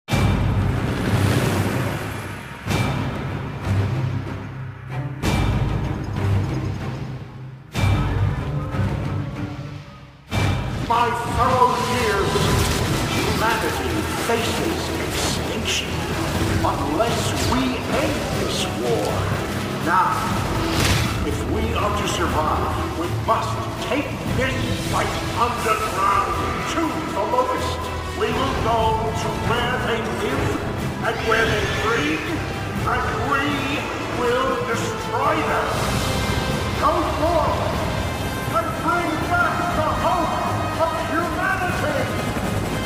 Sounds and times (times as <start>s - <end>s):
Music: 0.0s - 42.8s
Speech: 10.9s - 16.0s, 16.6s - 20.4s, 21.2s - 35.8s, 36.8s - 37.8s, 38.5s - 42.2s.